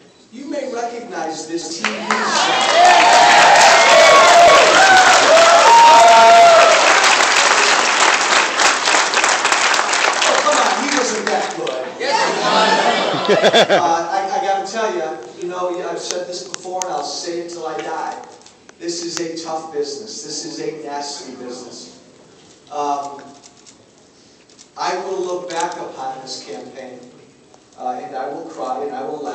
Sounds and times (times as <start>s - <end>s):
Male speech, man speaking: 0.4s - 2.1s, 10.3s - 12.3s, 13.8s - 22.0s, 22.7s - 23.3s, 24.8s - 27.2s, 27.8s - 29.3s.